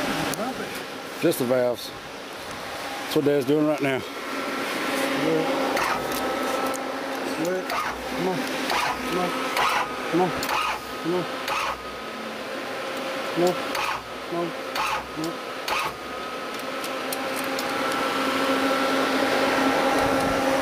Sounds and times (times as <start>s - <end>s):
Outside, rural or natural: 0.0s - 20.6s
Vehicle: 0.0s - 20.6s
Speech: 7.4s - 8.5s, 9.1s - 9.4s, 10.1s - 10.4s, 11.0s - 11.3s, 13.4s - 13.6s, 14.3s - 14.6s
Tools: 13.7s - 14.0s, 14.8s - 18.0s.